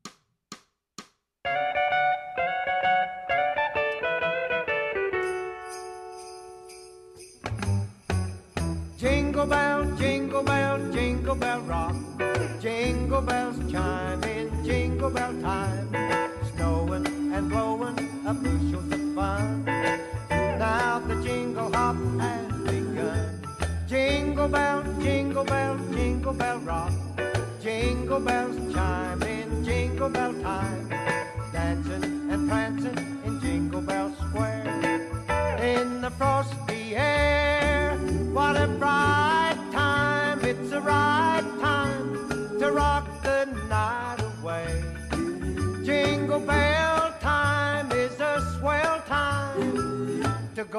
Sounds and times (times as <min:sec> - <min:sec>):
Jingle bell: 0:05.0 - 0:50.7.